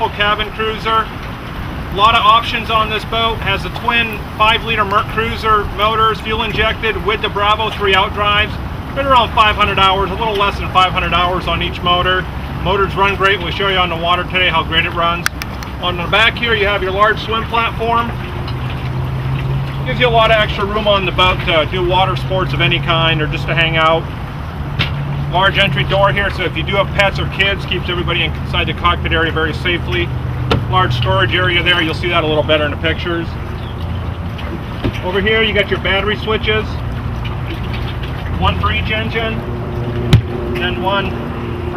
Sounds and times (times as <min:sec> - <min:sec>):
Speech: 0:00.0 - 0:01.1, 0:02.0 - 0:18.2, 0:19.9 - 0:24.0, 0:25.3 - 0:30.1, 0:30.7 - 0:33.4, 0:35.0 - 0:36.8, 0:38.4 - 0:39.4, 0:40.6 - 0:41.2
Motorboat, speedboat: 0:00.0 - 0:41.7.